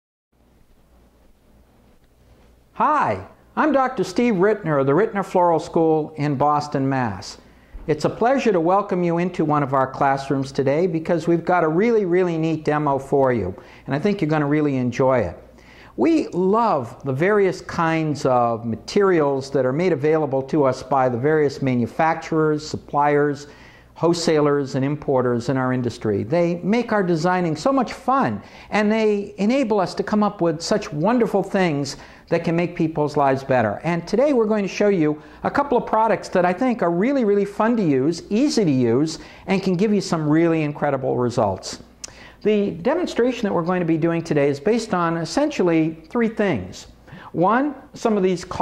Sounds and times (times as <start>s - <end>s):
Speech: 2.8s - 15.4s, 16.0s - 48.6s.